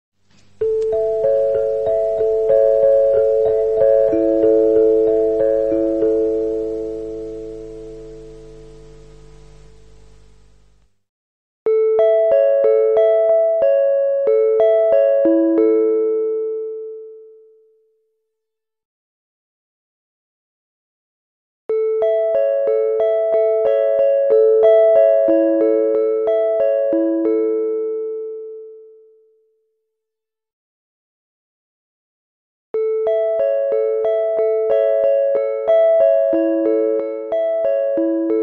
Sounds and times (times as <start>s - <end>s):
Music: 0.3s - 9.8s, 11.7s - 18.1s, 21.7s - 29.7s, 32.8s - 38.4s.